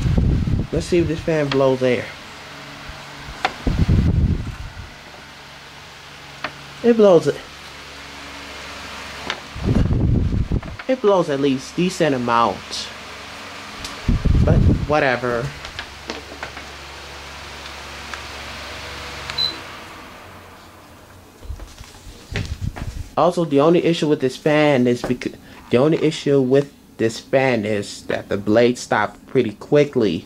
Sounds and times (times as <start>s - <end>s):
Mechanical fan: 0.0s - 30.2s
Speech: 0.7s - 2.2s, 6.8s - 7.5s, 10.8s - 13.0s, 14.4s - 15.6s, 23.2s - 30.2s.